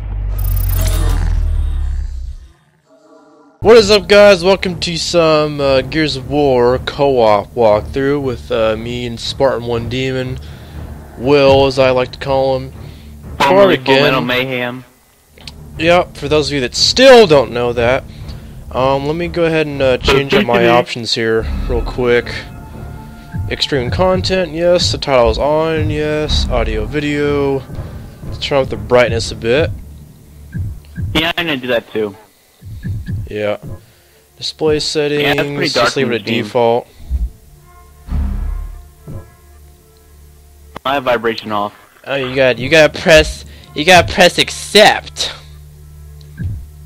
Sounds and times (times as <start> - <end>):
Music: 2.3 - 46.8.